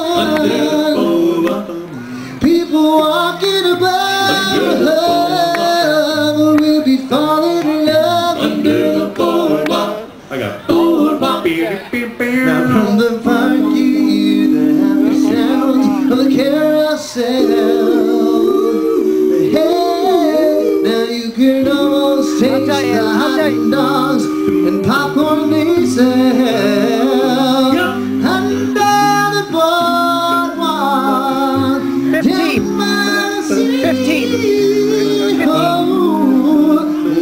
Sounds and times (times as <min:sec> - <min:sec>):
Singing: 0:00.0 - 0:37.2
Vocal music: 0:00.0 - 0:37.2.